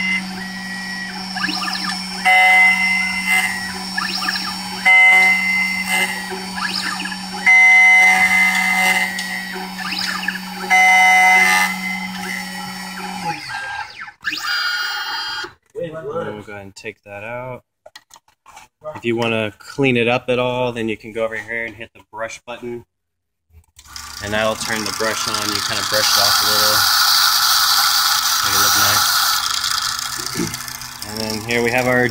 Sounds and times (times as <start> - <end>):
Speech: 15.8 - 17.6, 18.8 - 22.9, 24.2 - 26.8, 28.4 - 29.0, 31.0 - 32.1.